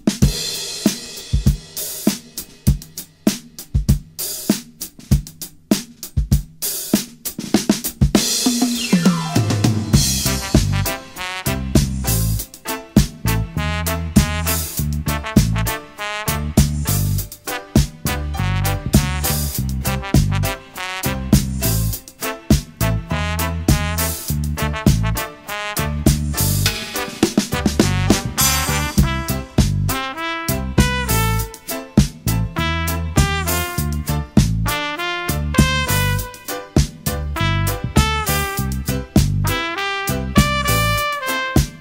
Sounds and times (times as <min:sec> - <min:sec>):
Music: 0:00.0 - 0:41.8.